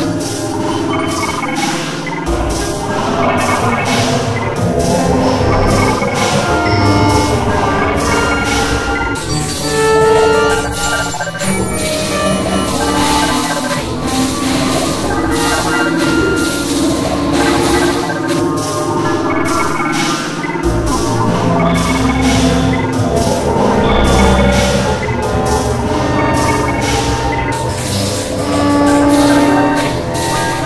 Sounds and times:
Music: 0:00.0 - 0:30.6.

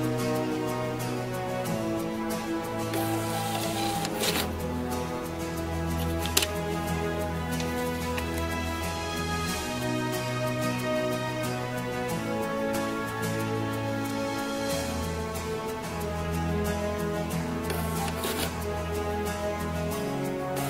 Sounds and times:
Music: 0:00.0 - 0:20.7
Printer: 0:02.9 - 0:04.5, 0:17.7 - 0:18.5.

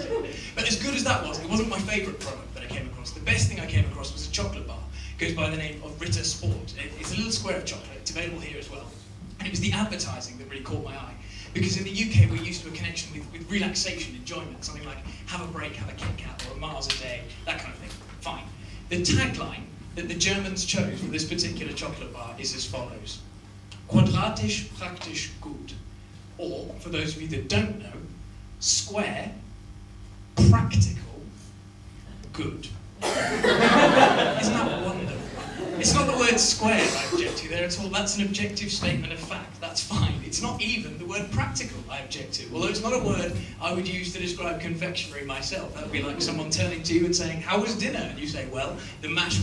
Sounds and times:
Speech: 0:00.0 - 0:23.2, 0:23.9 - 0:25.8, 0:26.4 - 0:29.5, 0:30.4 - 0:31.5, 0:32.1 - 0:32.8, 0:34.0 - 0:49.4.

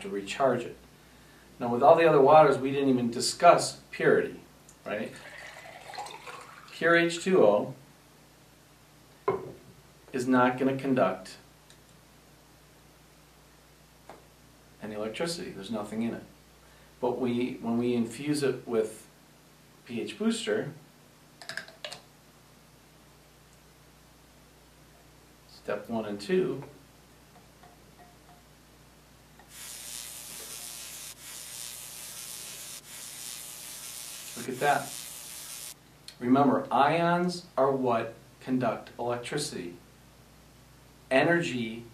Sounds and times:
Speech: 0:00.0 - 0:00.8, 0:01.6 - 0:05.3, 0:06.8 - 0:07.8, 0:10.1 - 0:11.5, 0:14.8 - 0:16.3, 0:17.0 - 0:19.1, 0:19.8 - 0:20.8, 0:25.5 - 0:26.8, 0:34.4 - 0:34.9, 0:36.2 - 0:39.8, 0:41.1 - 0:41.9
Electric shaver, electric razor: 0:29.4 - 0:35.8.

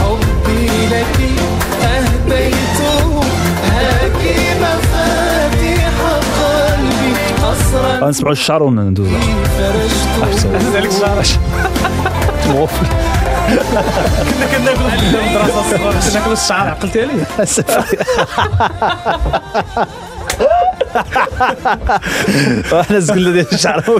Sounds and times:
Music: 0:00.0 - 0:23.9
Speech: 0:08.0 - 0:09.2, 0:14.4 - 0:17.8, 0:22.7 - 0:23.9.

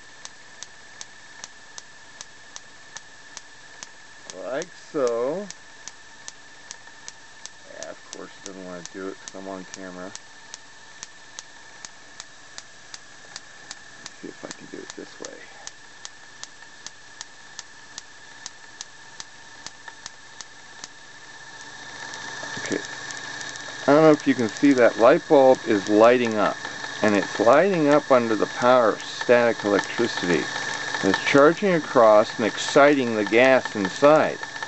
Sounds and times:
Speech: 0:04.3 - 0:05.5, 0:07.7 - 0:10.2, 0:14.2 - 0:15.7, 0:22.6 - 0:22.9, 0:23.8 - 0:34.4.

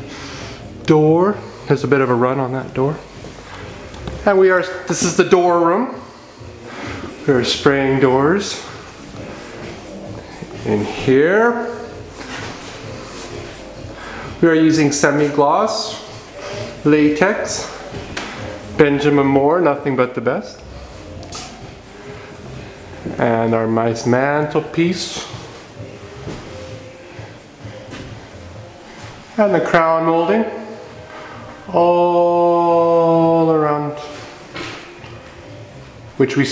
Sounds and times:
Speech: 0:00.9 - 0:03.0, 0:04.2 - 0:06.0, 0:07.3 - 0:08.7, 0:10.6 - 0:11.9, 0:14.4 - 0:16.1, 0:16.8 - 0:17.8, 0:18.8 - 0:20.6, 0:23.1 - 0:25.4, 0:29.4 - 0:30.8, 0:36.2 - 0:36.5.

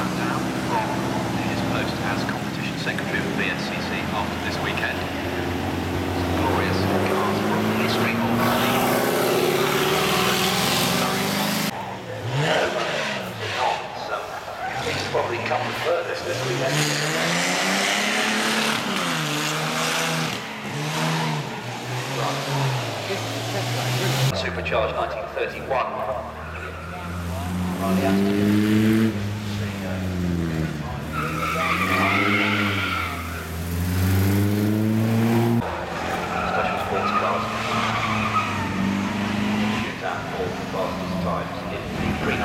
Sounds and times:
Speech: 0:00.0 - 0:05.4, 0:06.2 - 0:09.3, 0:10.2 - 0:17.0, 0:22.0 - 0:28.5, 0:29.4 - 0:33.2, 0:36.2 - 0:38.0, 0:39.9 - 0:42.4
Car: 0:00.0 - 0:42.4.

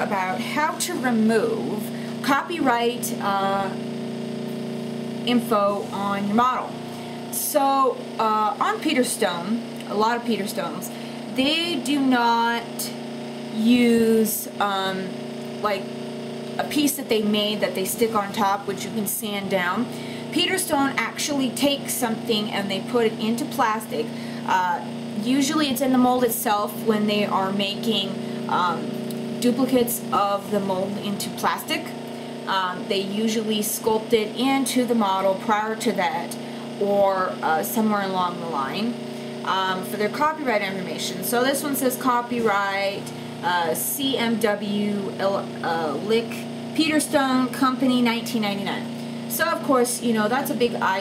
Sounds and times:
Speech: 0:00.0 - 0:03.8, 0:05.3 - 0:13.0, 0:13.6 - 0:15.8, 0:16.6 - 0:51.0.

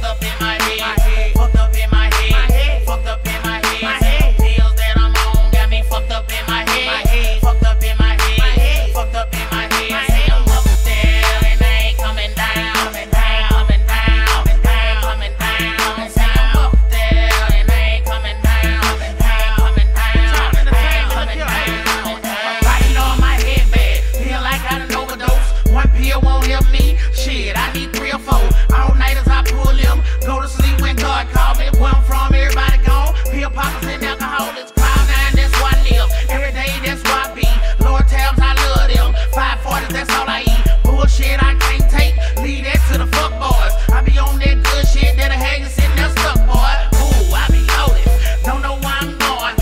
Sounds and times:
Music: 0:00.0 - 0:49.6.

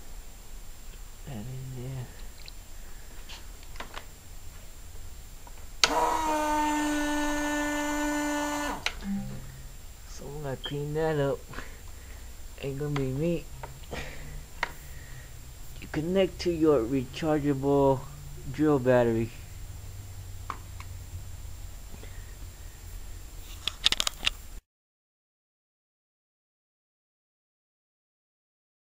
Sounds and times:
Speech: 0:01.2 - 0:02.2, 0:10.1 - 0:11.6, 0:12.6 - 0:13.5, 0:15.8 - 0:19.4.

